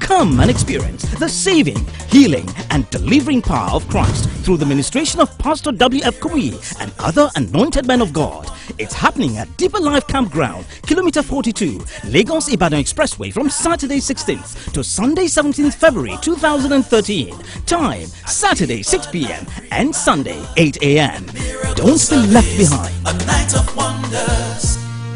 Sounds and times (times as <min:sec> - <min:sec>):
Speech: 0:00.0 - 0:22.9
Music: 0:00.0 - 0:25.1.